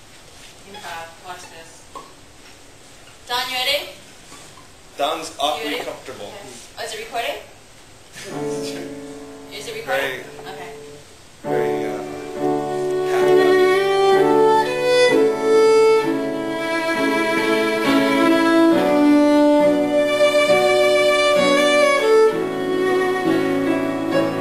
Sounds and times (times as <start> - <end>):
Violin, fiddle: 12.3 - 24.4.